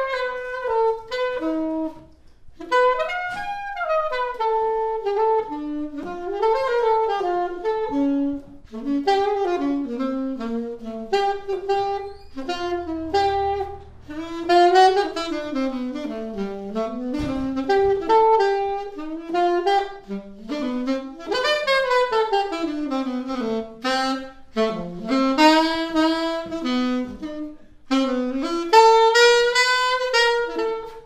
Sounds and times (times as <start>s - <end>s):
Brass instrument: 0.0s - 31.0s
Jazz: 0.0s - 31.0s
Saxophone: 0.0s - 31.0s.